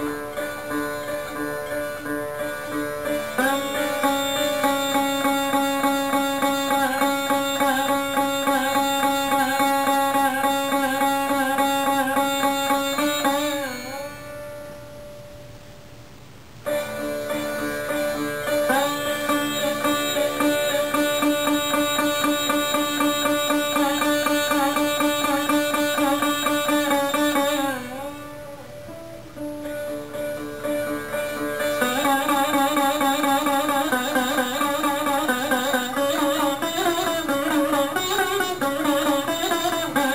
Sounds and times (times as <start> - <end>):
Bowed string instrument: 0.0 - 16.0, 16.6 - 40.1
Sitar: 0.0 - 16.0, 16.6 - 40.1
Carnatic music: 0.0 - 40.1.